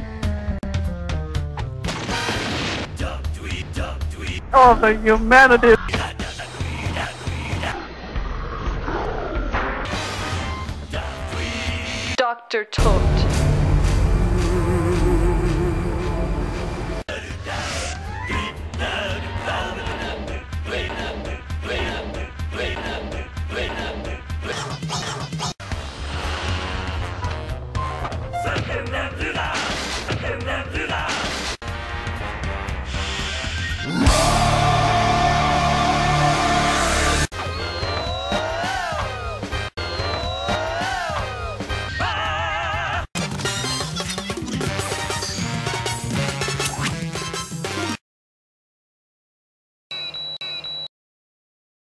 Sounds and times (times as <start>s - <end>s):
Music: 0.0s - 8.0s, 9.8s - 12.2s, 12.8s - 31.0s, 31.6s - 42.5s, 43.1s - 48.0s
Speech: 4.5s - 5.9s, 12.2s - 13.2s.